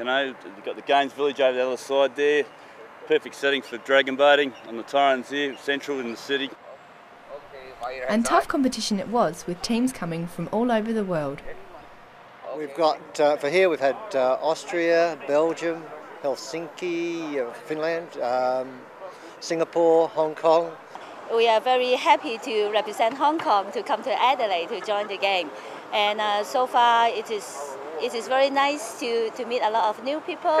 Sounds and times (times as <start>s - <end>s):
Speech: 7.3s - 11.4s.